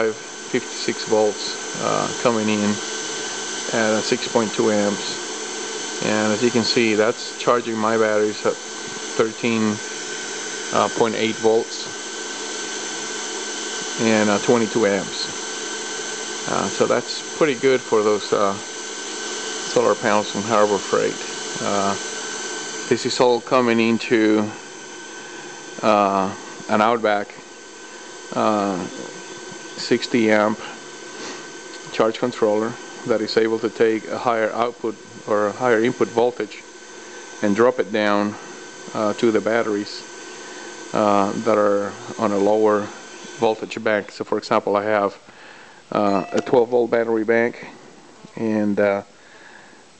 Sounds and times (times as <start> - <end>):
Speech: 0.0 - 2.8, 3.7 - 5.2, 6.0 - 9.8, 10.7 - 12.0, 14.0 - 15.4, 16.5 - 18.6, 19.7 - 22.0, 22.9 - 24.6, 25.8 - 27.4, 28.3 - 29.1, 29.8 - 30.8, 31.8 - 36.7, 37.4 - 40.1, 40.9 - 45.2, 45.9 - 49.1.